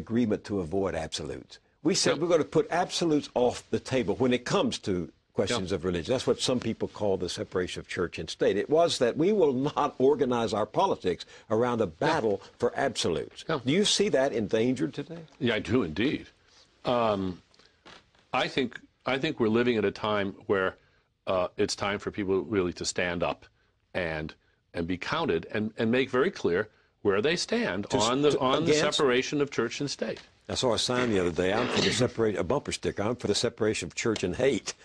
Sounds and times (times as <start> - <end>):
Speech: 0.0 - 16.3, 16.9 - 17.4, 18.4 - 34.7.